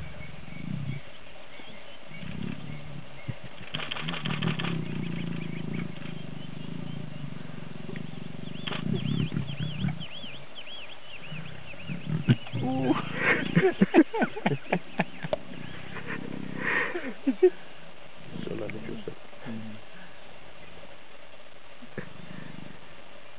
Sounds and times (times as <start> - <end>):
Roaring cats (lions, tigers): 0.5 - 1.1, 2.1 - 10.4, 11.1 - 13.7, 15.0 - 16.8, 21.9 - 22.9
Male speech, man speaking: 18.3 - 19.8.